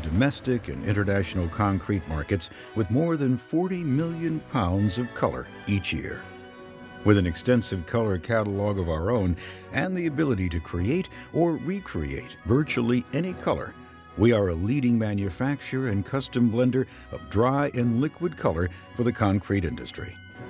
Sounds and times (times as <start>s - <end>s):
Speech: 0.0s - 6.2s, 7.1s - 20.2s
Music: 0.0s - 20.4s.